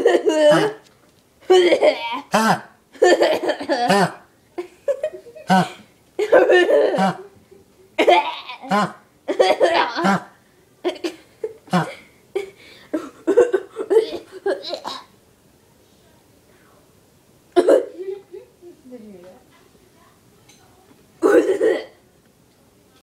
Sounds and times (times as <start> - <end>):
Speech: 18.0 - 21.0.